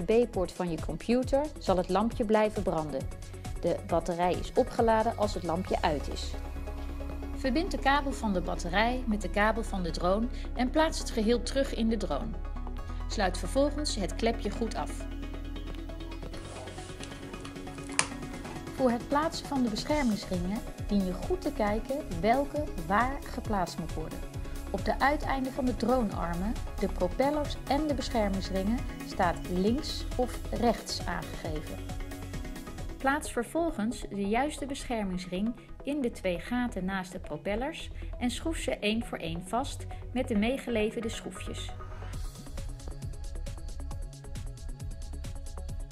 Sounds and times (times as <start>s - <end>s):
Speech: 0.0s - 3.0s, 3.6s - 6.4s, 7.4s - 12.4s, 13.1s - 15.0s, 18.8s - 24.2s, 24.8s - 31.8s, 33.0s - 41.7s
Music: 0.0s - 45.9s.